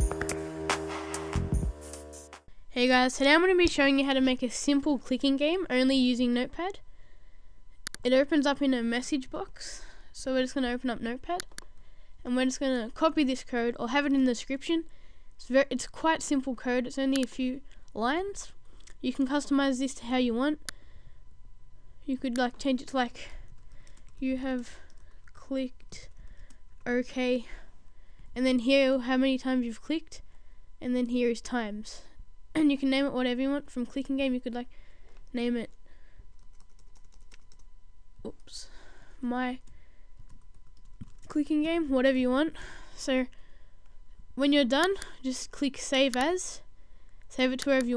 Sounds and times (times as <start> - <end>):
Speech: 2.7 - 6.8, 8.0 - 11.5, 12.2 - 20.6, 22.1 - 23.4, 24.2 - 26.2, 26.8 - 27.7, 28.4 - 30.2, 30.8 - 34.7, 35.3 - 35.7, 38.2 - 39.6, 41.3 - 43.3, 44.4 - 46.7, 47.3 - 47.9.